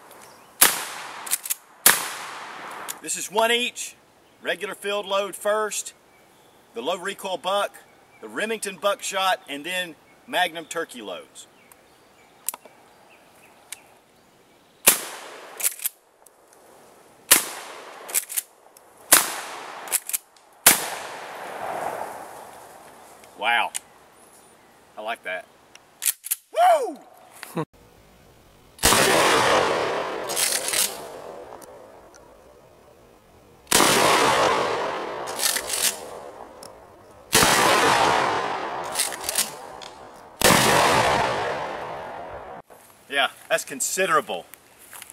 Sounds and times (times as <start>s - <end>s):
Gunshot, gunfire: 0.6s - 2.6s, 14.9s - 15.5s, 19.1s - 19.8s, 20.7s - 21.9s, 28.8s - 30.2s, 33.7s - 35.1s, 37.4s - 38.8s, 40.4s - 41.8s.